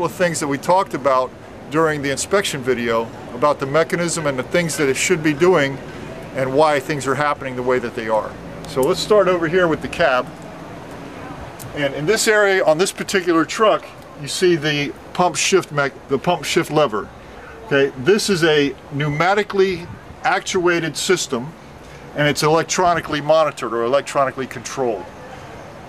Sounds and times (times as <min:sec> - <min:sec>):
Speech: 0:00.0 - 0:10.3, 0:11.3 - 0:21.6, 0:22.2 - 0:25.5.